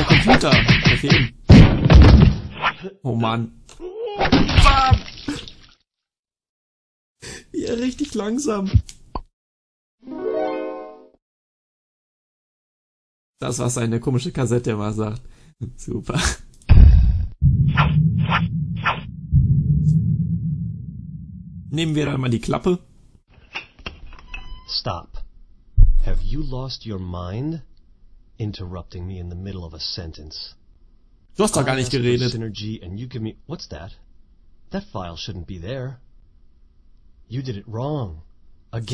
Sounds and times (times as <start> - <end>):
Speech: 2.8 - 5.0, 7.5 - 8.9, 13.4 - 16.4, 21.7 - 22.9, 24.7 - 25.3, 26.0 - 27.7, 28.4 - 30.6, 31.4 - 34.0, 34.7 - 36.0, 37.3 - 38.9
Music: 10.0 - 11.2.